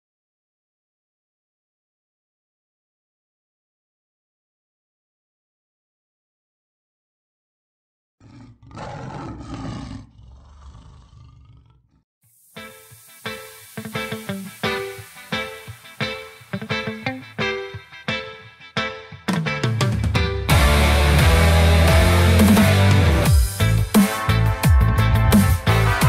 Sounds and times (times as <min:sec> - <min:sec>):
Roar: 0:08.2 - 0:12.0.